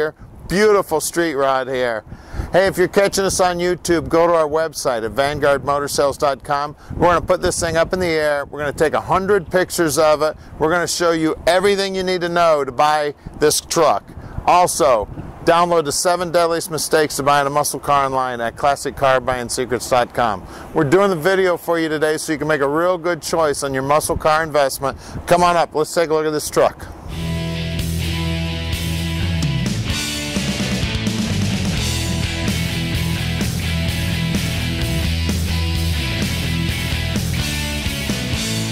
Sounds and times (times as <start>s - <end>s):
Speech: 0.0s - 26.9s.